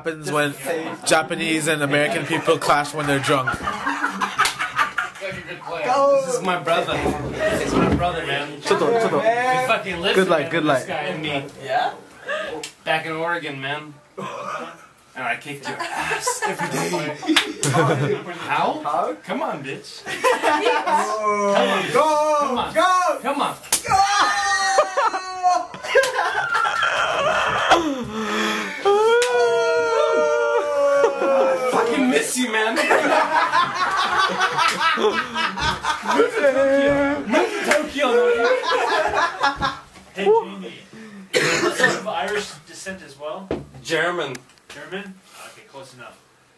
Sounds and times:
Inside, small room: 0.0s - 46.5s
Slap, smack: 23.7s - 24.0s
Screaming: 23.8s - 25.7s, 26.6s - 28.0s, 28.8s - 31.9s.

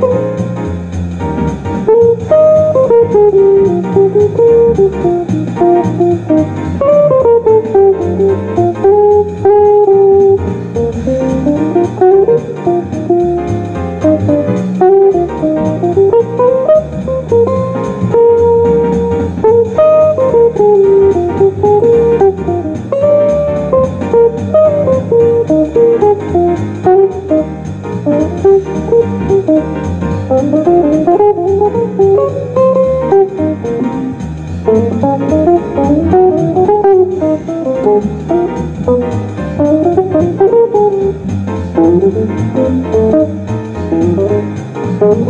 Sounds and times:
Strum: 0.0s - 45.3s.

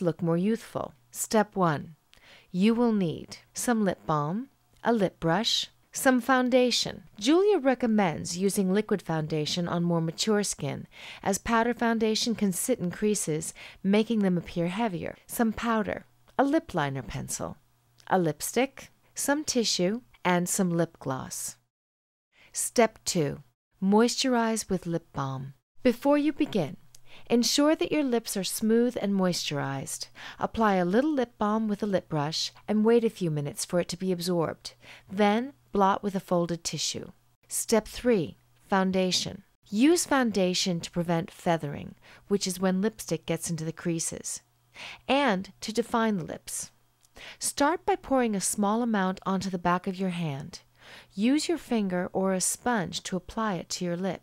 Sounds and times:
Narration, monologue: 0.0s - 21.7s, 22.4s - 54.2s.

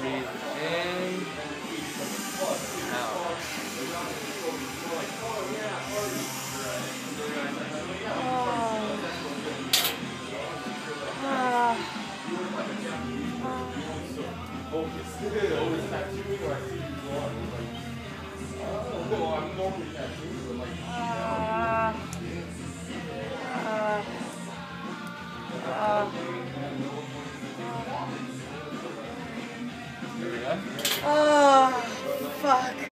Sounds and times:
Music: 0.0s - 32.9s.

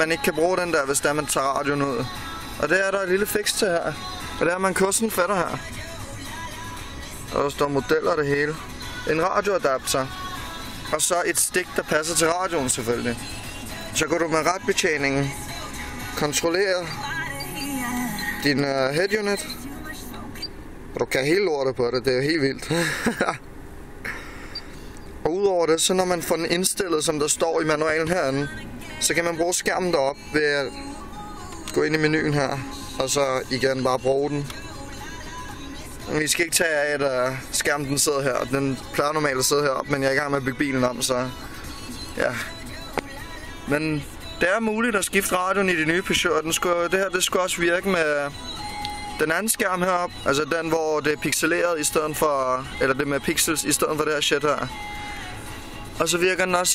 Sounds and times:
Speech: 0.0s - 5.6s, 7.3s - 10.1s, 11.0s - 13.2s, 14.0s - 15.3s, 16.2s - 17.0s, 18.4s - 20.4s, 21.0s - 22.7s, 25.2s - 30.7s, 31.7s - 34.5s, 36.1s - 41.3s, 43.7s - 48.3s, 49.2s - 54.7s, 56.0s - 56.7s
Music: 0.0s - 20.6s, 26.0s - 56.7s.

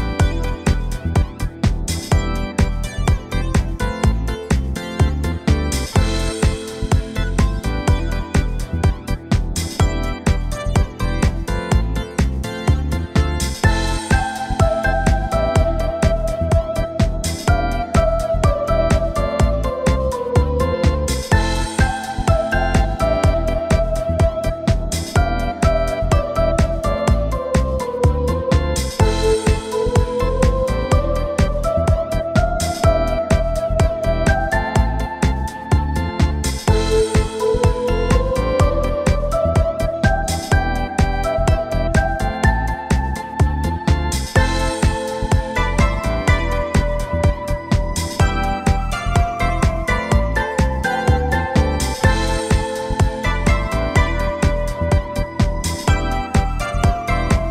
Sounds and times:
Music: 0.0s - 57.5s.

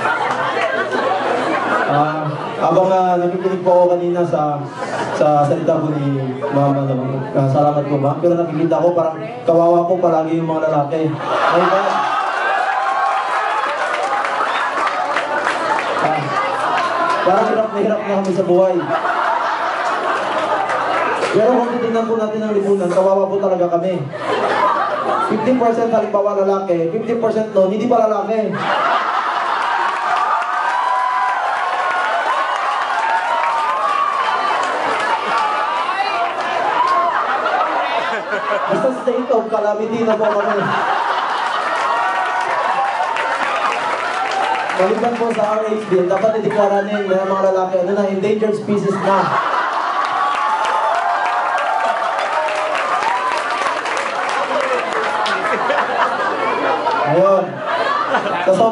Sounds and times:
Male speech, man speaking: 1.9s - 12.0s, 16.0s - 16.3s, 17.2s - 19.0s, 21.4s - 24.1s, 25.3s - 28.6s, 38.7s - 40.8s, 44.8s - 49.4s, 57.0s - 57.6s, 58.4s - 58.7s.

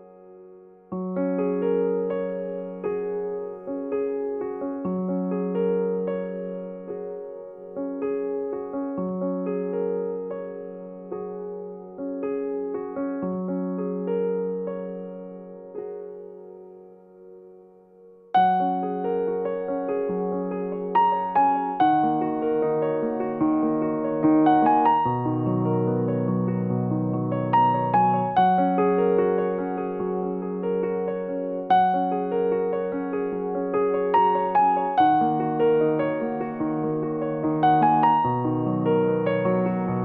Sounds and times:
Piano: 0.0s - 40.0s.

